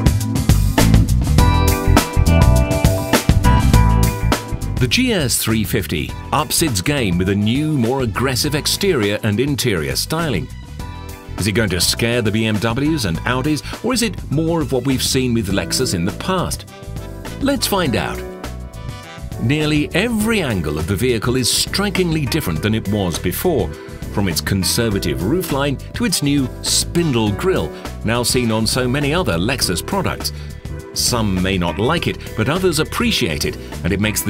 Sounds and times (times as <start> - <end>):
Music: 0.0 - 34.2
Speech: 4.8 - 10.5, 11.4 - 16.6, 17.4 - 18.2, 19.4 - 30.4, 31.0 - 34.2.